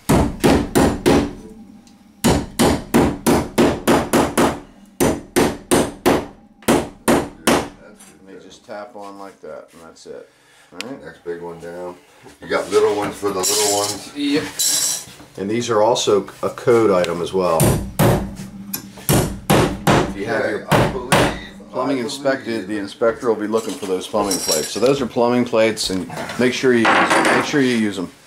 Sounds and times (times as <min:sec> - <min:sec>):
Speech: 0:07.4 - 0:14.6, 0:15.4 - 0:17.7, 0:20.2 - 0:28.2.